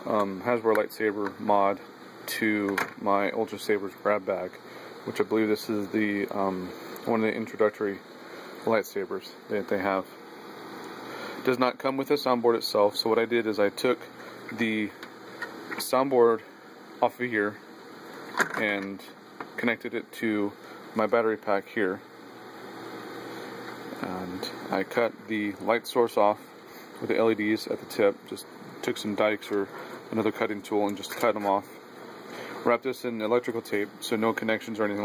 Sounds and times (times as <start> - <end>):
Speech: 0.0 - 8.0, 8.6 - 10.2, 11.4 - 15.0, 15.8 - 17.6, 18.5 - 22.1, 24.0 - 26.4, 27.0 - 31.8, 32.6 - 35.0.